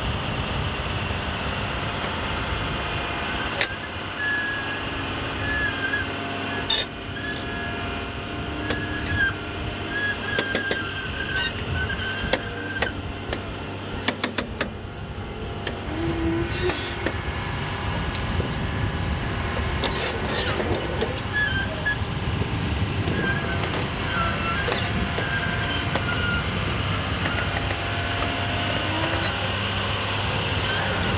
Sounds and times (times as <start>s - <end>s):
Vehicle: 0.0s - 31.1s.